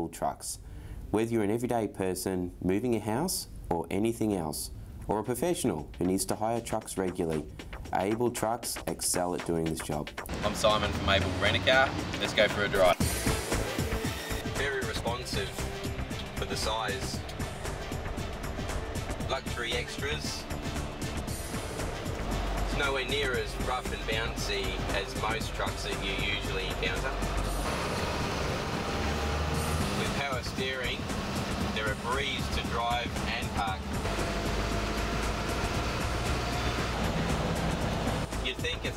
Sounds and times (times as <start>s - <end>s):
Speech: 0.0s - 13.0s, 14.6s - 15.6s, 16.4s - 17.2s, 19.3s - 20.4s, 22.7s - 27.1s, 30.0s - 31.0s, 31.8s - 33.8s, 38.4s - 38.9s
Music: 5.0s - 38.9s
Truck: 10.3s - 13.4s, 15.3s - 38.9s.